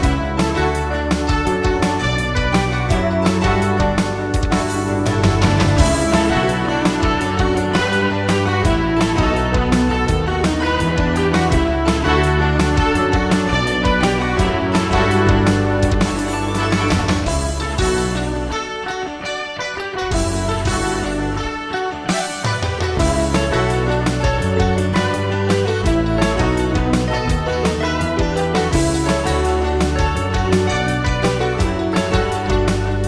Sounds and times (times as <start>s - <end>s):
Theme music: 0.0s - 33.0s.